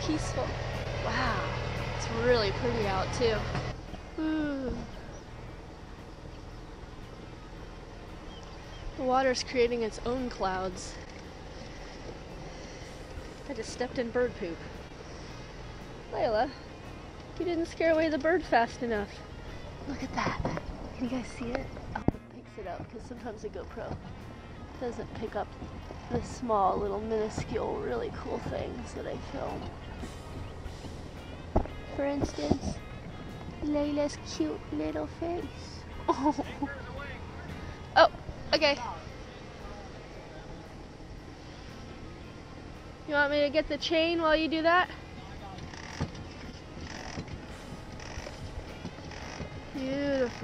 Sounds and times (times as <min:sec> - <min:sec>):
Music: 0:00.0 - 0:50.4.